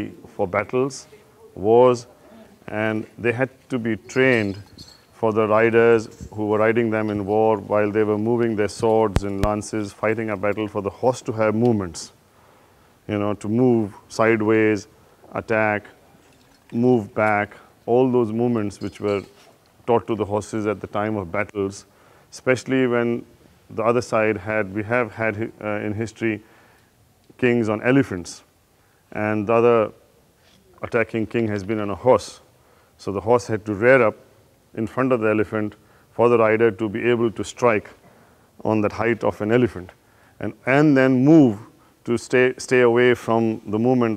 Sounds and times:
Speech: 0.0 - 4.6, 5.2 - 12.2, 13.1 - 16.0, 16.7 - 26.4, 27.4 - 28.5, 29.1 - 30.0, 30.6 - 34.2, 34.8 - 38.0, 38.6 - 44.1.

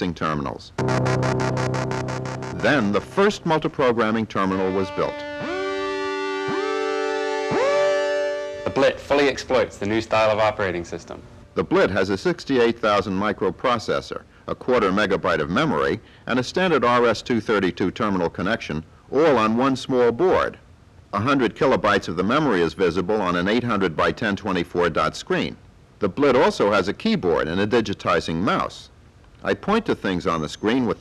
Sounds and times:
Speech: 0.0 - 0.8, 2.6 - 5.4, 8.7 - 31.0
Music: 0.8 - 9.5.

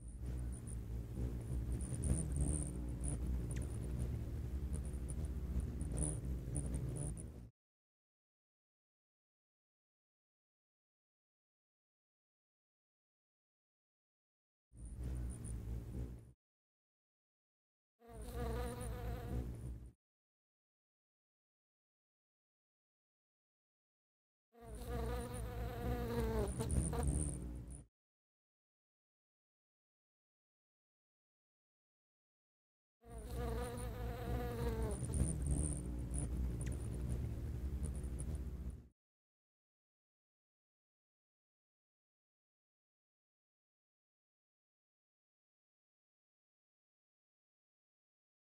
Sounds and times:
Bee, wasp, etc.: 18.0 - 19.8, 24.6 - 27.6, 33.1 - 38.7.

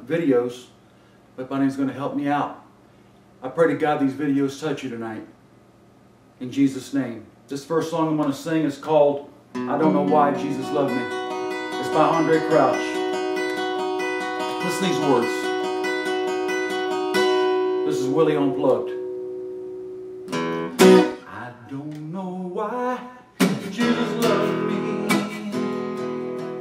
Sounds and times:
Speech: 0.0 - 0.8, 1.4 - 2.6, 3.4 - 5.4, 6.4 - 11.1, 11.8 - 13.0, 14.6 - 15.5, 17.9 - 19.0, 21.3 - 22.3
Music: 9.6 - 21.3, 23.4 - 26.6.

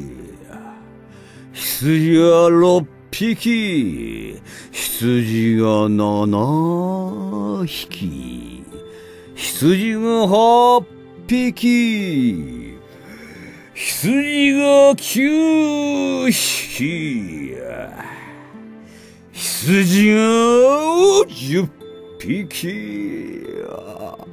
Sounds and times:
Music: 0.0 - 24.3.

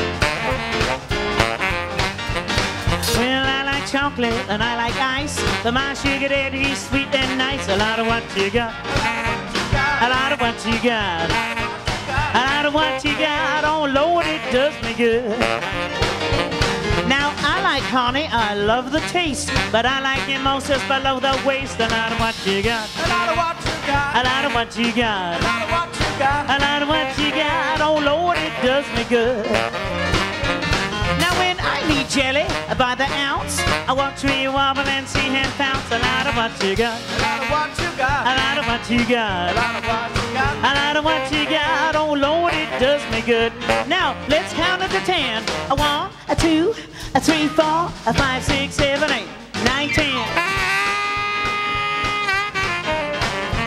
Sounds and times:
Exciting music: 0.0 - 18.3, 29.3 - 34.3, 35.4 - 46.1, 47.3 - 53.6
Blues: 0.0 - 53.6
Funk: 0.0 - 53.6
Happy music: 0.0 - 53.6.

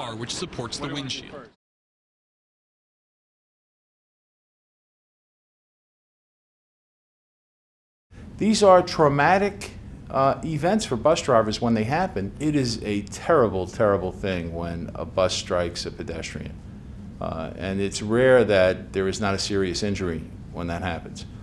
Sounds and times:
Speech: 8.4 - 16.6, 17.2 - 21.3.

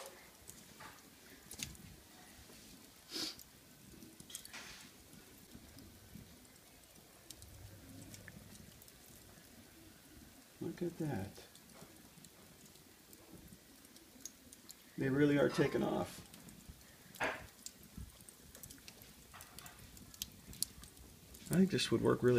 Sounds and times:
Fire: 0.0 - 22.3.

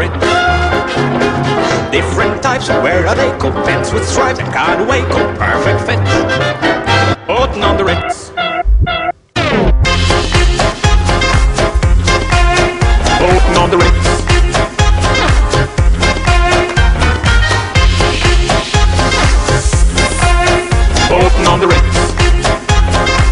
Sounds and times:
Funny music: 0.0 - 23.3.

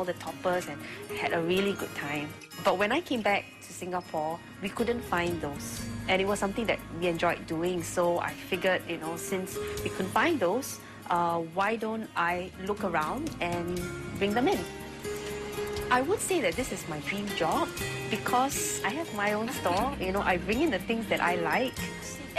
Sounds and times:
Music: 0.0 - 22.3
Speech: 15.9 - 22.3.

